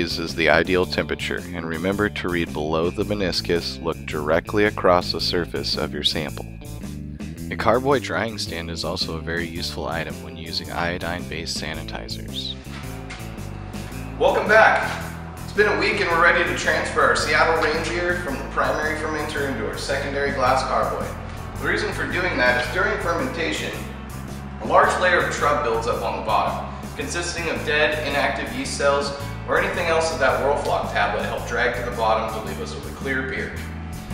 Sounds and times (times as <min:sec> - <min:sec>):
Speech: 0:00.0 - 0:06.5, 0:07.5 - 0:12.6, 0:14.2 - 0:23.8, 0:24.6 - 0:33.6
Music: 0:00.0 - 0:34.1.